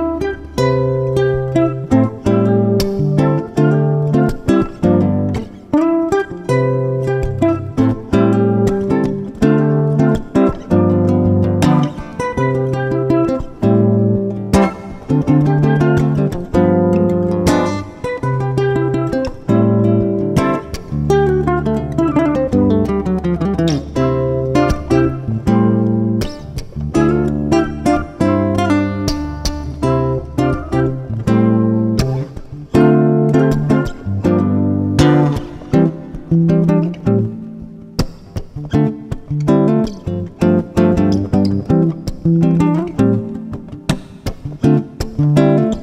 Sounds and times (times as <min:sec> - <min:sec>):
Acoustic guitar: 0:00.0 - 0:45.8
Bass guitar: 0:00.0 - 0:45.8.